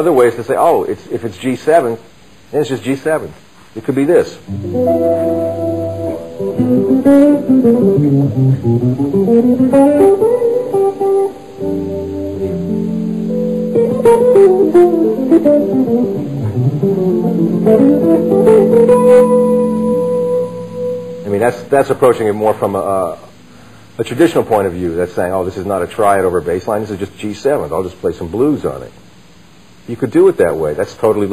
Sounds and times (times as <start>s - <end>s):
Speech: 0.0s - 4.5s, 21.2s - 23.3s, 24.0s - 29.0s, 29.8s - 31.3s
Acoustic guitar: 4.5s - 24.8s
Strum: 4.5s - 25.5s.